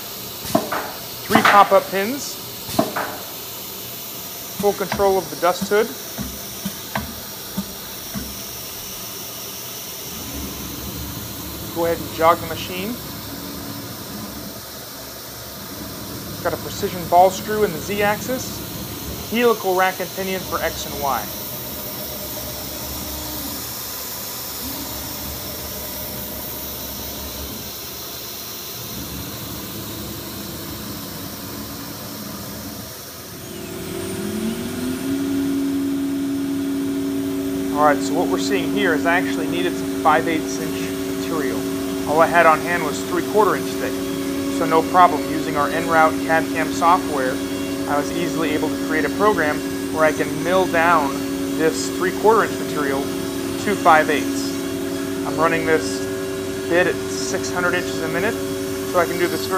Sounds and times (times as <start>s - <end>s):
Speech: 1.3s - 2.4s, 4.6s - 6.0s, 11.7s - 13.0s, 16.4s - 18.6s, 19.3s - 21.3s, 37.7s - 54.6s, 55.3s - 56.1s, 56.7s - 59.5s.